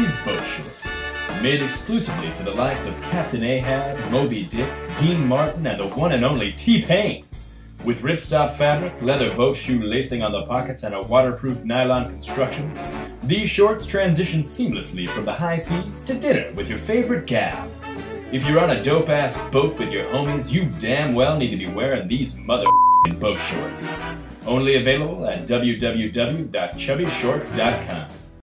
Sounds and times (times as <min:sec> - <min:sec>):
Speech: 0:00.0 - 0:17.7, 0:18.3 - 0:28.2
Music: 0:00.0 - 0:28.4.